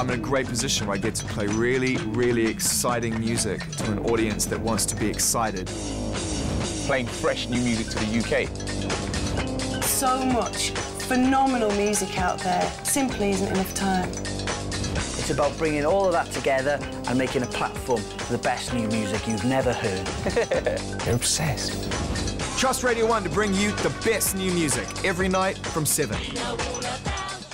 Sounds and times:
Speech: 0.0 - 5.6, 22.6 - 26.2
Music: 0.0 - 27.5.

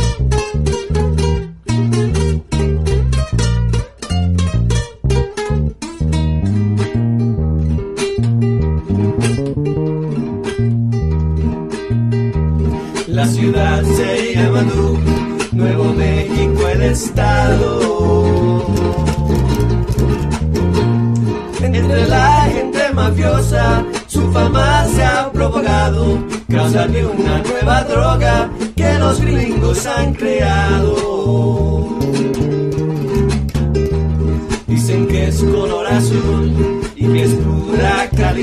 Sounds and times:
Music: 0.0 - 38.4.

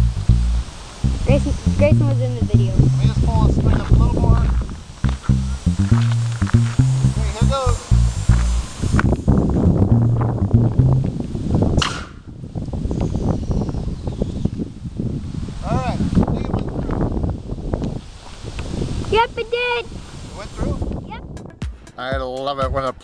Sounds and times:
Arrow: 11.8 - 12.3.

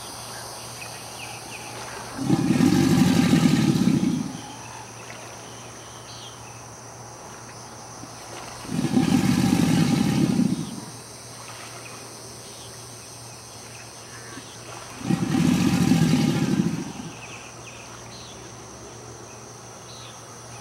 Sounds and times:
Environmental noise: 0.0 - 20.6
Roar: 2.1 - 4.9, 8.6 - 10.9, 14.3 - 17.3.

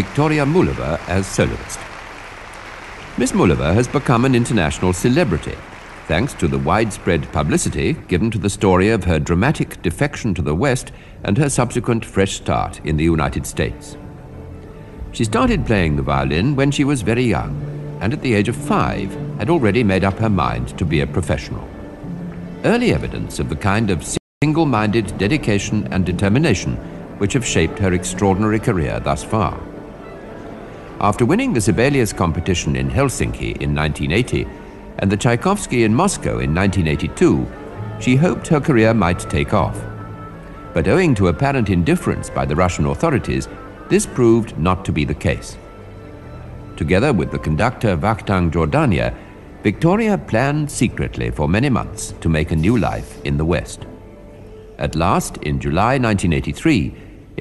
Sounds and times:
Speech: 0.0 - 1.8, 3.2 - 14.0, 15.2 - 21.7, 22.6 - 29.7, 31.0 - 39.9, 40.8 - 45.6, 46.8 - 53.9, 54.8 - 57.4.

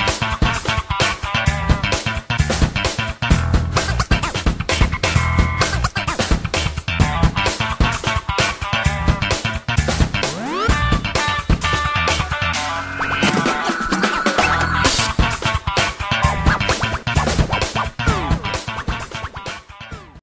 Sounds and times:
Funny music: 0.0 - 20.2.

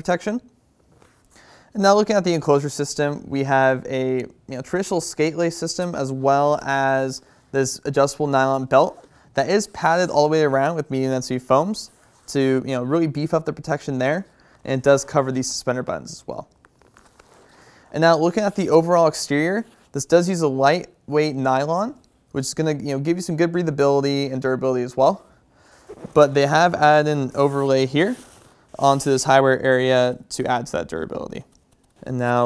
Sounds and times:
Speech: 0.0 - 0.5, 1.7 - 16.5, 17.9 - 25.3, 26.1 - 32.4.

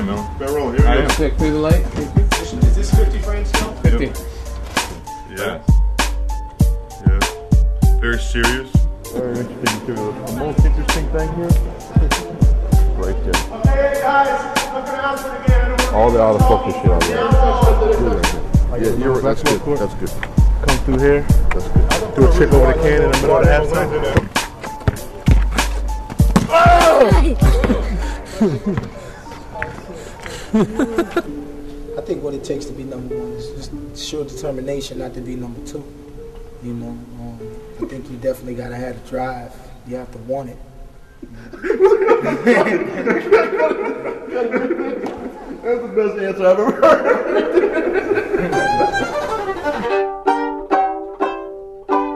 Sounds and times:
Music: 0.0 - 43.6, 46.7 - 52.1
Speech: 13.0 - 21.2, 22.2 - 24.2.

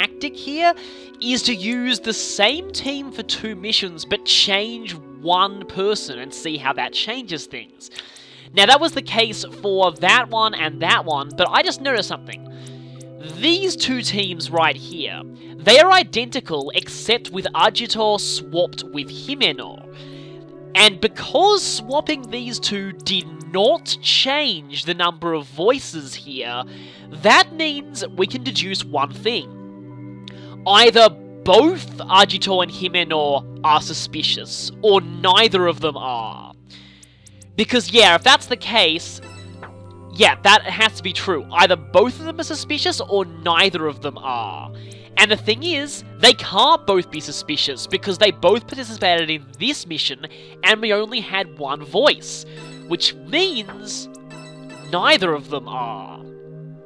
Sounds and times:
Speech: 0.0 - 8.0, 8.6 - 12.4, 13.2 - 19.8, 20.8 - 29.5, 30.6 - 36.6, 37.6 - 39.2, 40.2 - 54.1, 54.9 - 56.2
Music: 0.0 - 56.8.

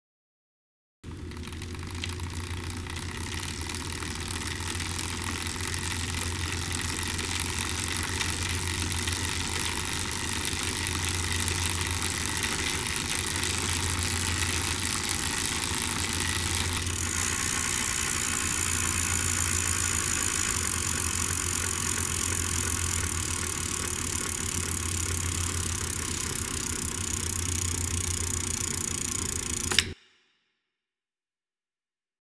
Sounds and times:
Bicycle: 1.1 - 30.0.

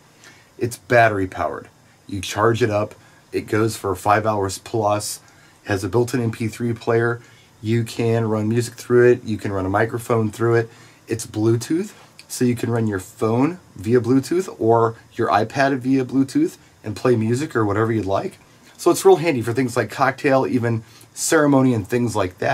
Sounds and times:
Speech: 0.6 - 22.5.

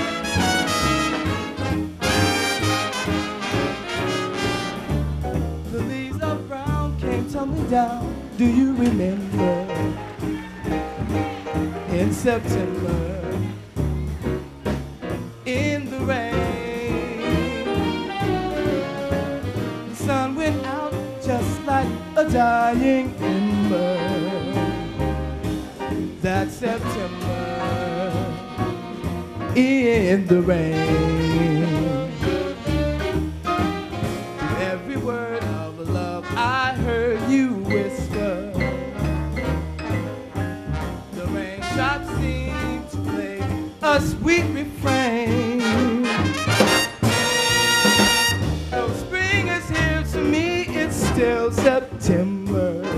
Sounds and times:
Music: 0.0 - 52.9.

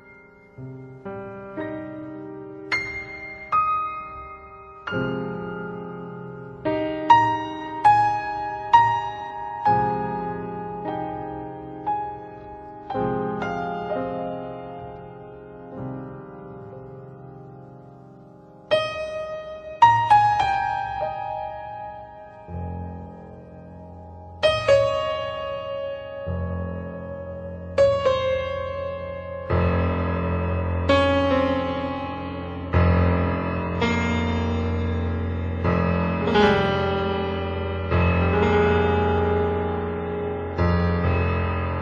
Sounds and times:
Music: 0.0 - 41.8.

